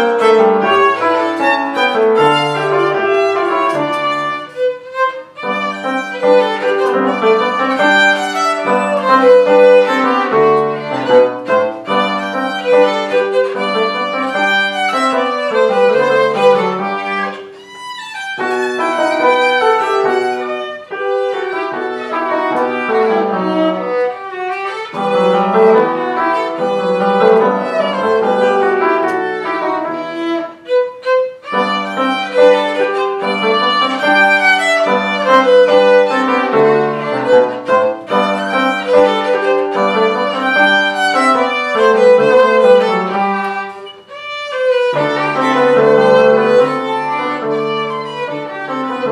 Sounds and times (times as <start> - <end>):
Violin, fiddle: 0.0 - 49.1.